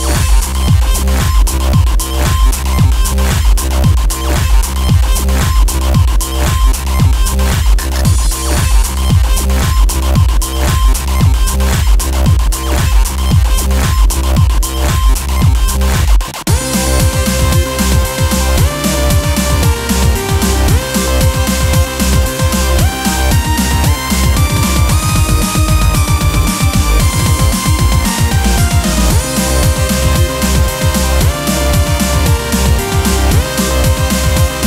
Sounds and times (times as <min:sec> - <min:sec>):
Music: 0:00.0 - 0:34.6
Sound effect: 0:00.0 - 0:34.6.